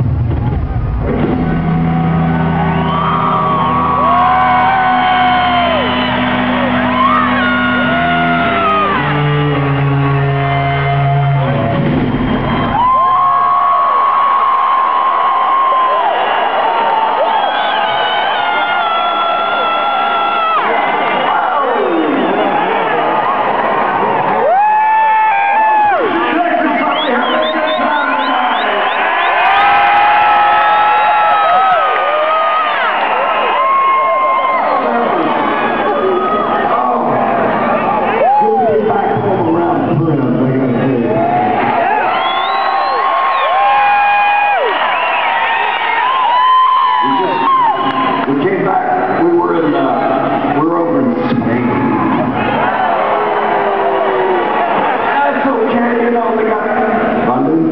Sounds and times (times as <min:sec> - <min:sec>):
Cheering: 0:00.0 - 0:57.7
Crowd: 0:00.0 - 0:57.7.